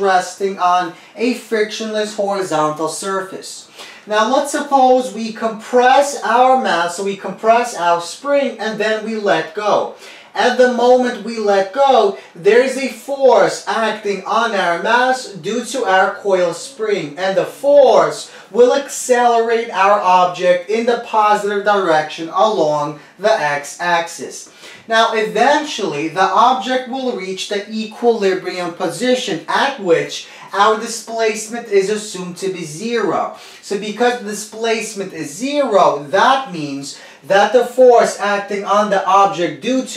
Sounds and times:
Speech: 0.0 - 39.9.

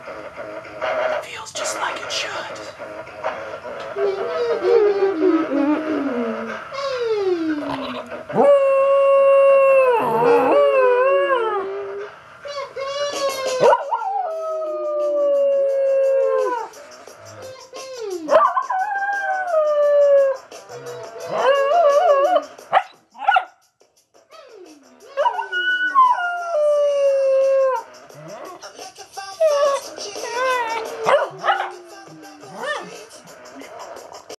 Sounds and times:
Music: 0.0 - 34.3
Howl: 4.0 - 12.1, 13.5 - 16.8, 18.3 - 22.5, 25.1 - 28.6, 29.4 - 32.9.

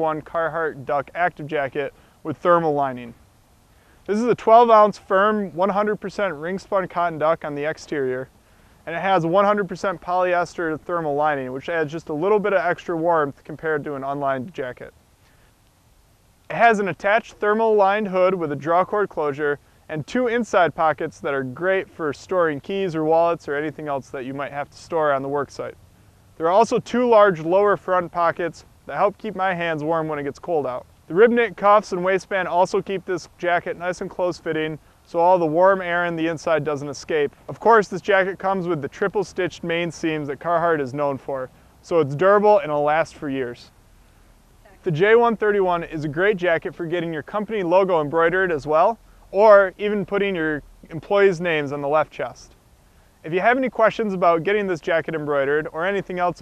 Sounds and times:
Speech: 0.0 - 3.2, 4.1 - 14.9, 16.5 - 25.8, 26.4 - 43.7, 44.7 - 52.6, 53.2 - 56.4.

